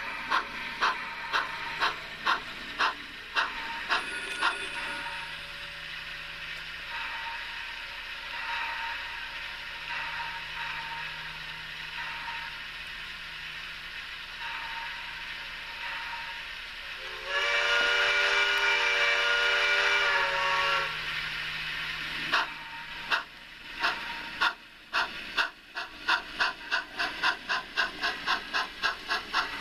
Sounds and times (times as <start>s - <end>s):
Train whistle: 17.0s - 21.1s.